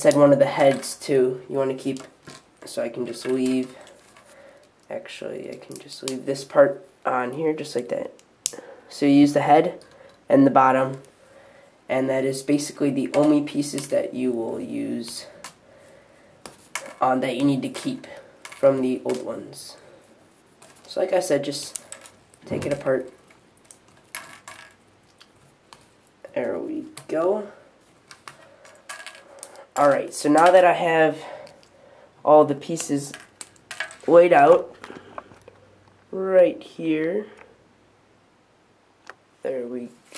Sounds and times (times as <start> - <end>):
Speech: 0.0 - 3.8, 4.9 - 8.2, 8.9 - 11.1, 11.9 - 15.4, 17.0 - 19.8, 20.9 - 21.8, 22.5 - 23.2, 26.3 - 27.6, 29.8 - 31.4, 32.2 - 33.2, 34.0 - 34.7, 36.1 - 37.4, 39.4 - 40.0.